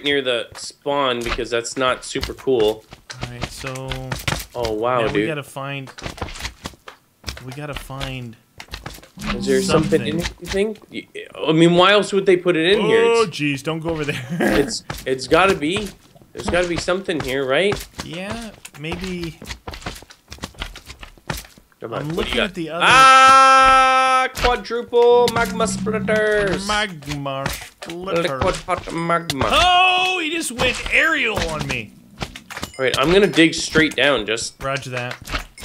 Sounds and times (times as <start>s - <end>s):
Speech: 0.0s - 5.9s, 9.2s - 19.4s, 21.8s - 31.9s, 32.8s - 35.2s
Walk, footsteps: 5.9s - 10.6s, 14.8s - 22.5s.